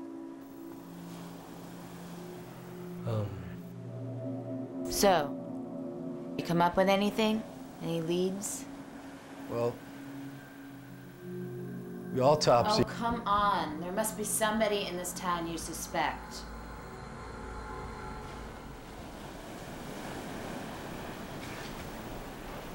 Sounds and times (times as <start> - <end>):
Speech: 12.2 - 16.4.